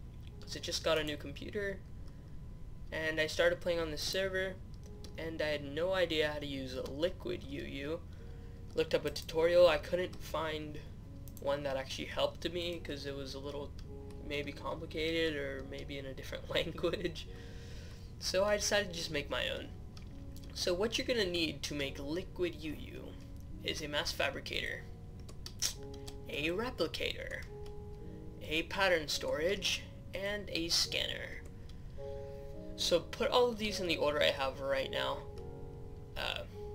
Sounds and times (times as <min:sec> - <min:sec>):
Speech: 0:00.4 - 0:01.8, 0:02.9 - 0:04.6, 0:05.2 - 0:08.0, 0:08.8 - 0:10.8, 0:11.4 - 0:17.3, 0:18.2 - 0:19.7, 0:20.5 - 0:24.9, 0:25.6 - 0:27.5, 0:28.4 - 0:31.4, 0:32.8 - 0:35.3, 0:36.2 - 0:36.6.